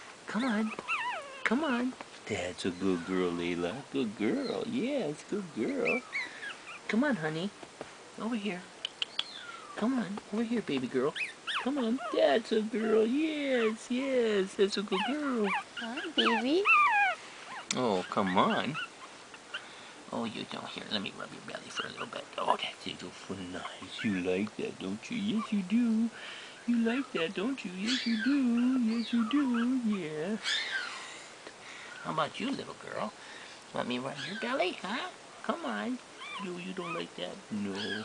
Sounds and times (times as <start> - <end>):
Inside, small room: 0.0 - 38.0
Dog: 0.6 - 1.5, 14.9 - 19.6, 21.7 - 22.2, 36.2 - 37.1
Speech: 9.8 - 16.7, 33.8 - 38.0.